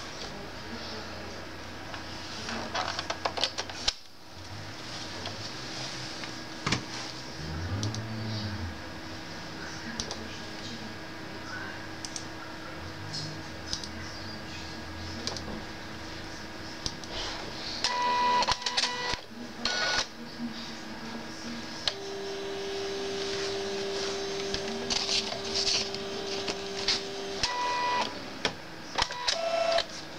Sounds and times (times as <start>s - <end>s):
Printer: 14.5s - 20.2s, 21.1s - 30.1s.